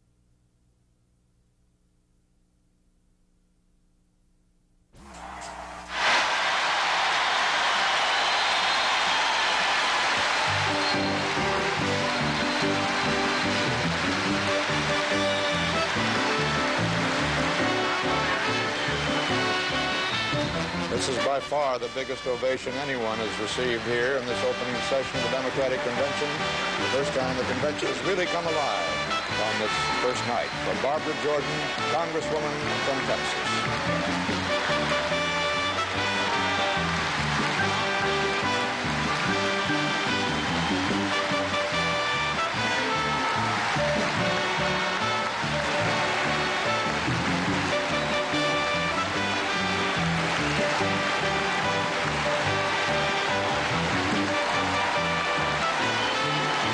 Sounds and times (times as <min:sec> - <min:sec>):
Music: 0:06.2 - 0:56.7
Male speech, man speaking: 0:20.9 - 0:33.4.